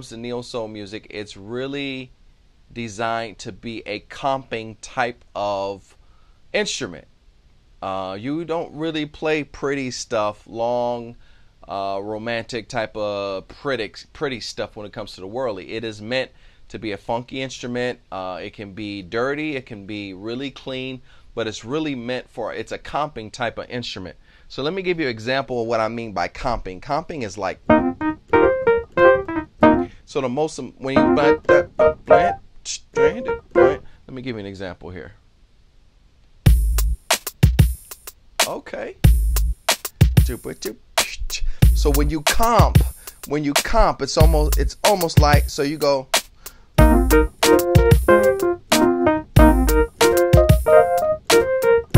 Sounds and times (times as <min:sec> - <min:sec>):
Speech: 0:00.0 - 0:02.1, 0:02.7 - 0:06.0, 0:06.6 - 0:07.1, 0:07.8 - 0:27.6, 0:30.1 - 0:35.2, 0:38.4 - 0:39.0, 0:40.2 - 0:46.1.